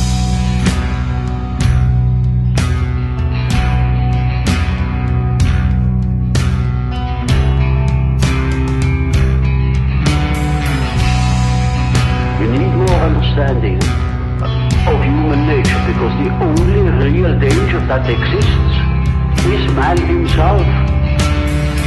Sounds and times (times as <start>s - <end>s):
Music: 0.0s - 21.8s
Speech: 12.3s - 20.8s.